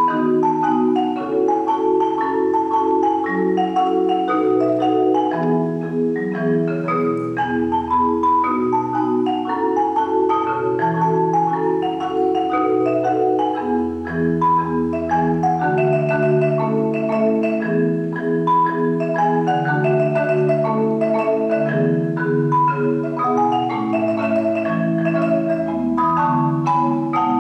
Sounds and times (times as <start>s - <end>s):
Marimba, xylophone: 0.0s - 27.4s
Vibraphone: 0.0s - 27.4s.